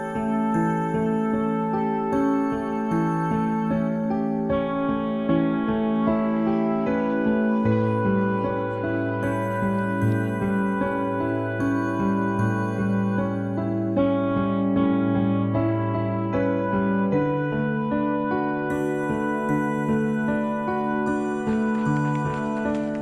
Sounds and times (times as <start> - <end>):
Music: 0.0 - 23.0.